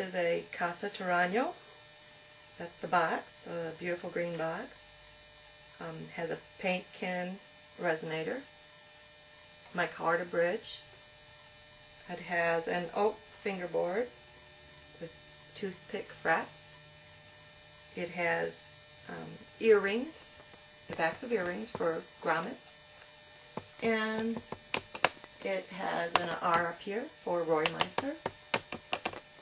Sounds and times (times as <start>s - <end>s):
Speech: 0.0s - 1.6s, 2.6s - 4.9s, 5.8s - 8.5s, 9.7s - 10.8s, 12.1s - 14.1s, 18.0s - 20.3s, 20.9s - 22.8s, 23.8s - 24.4s, 25.4s - 28.3s.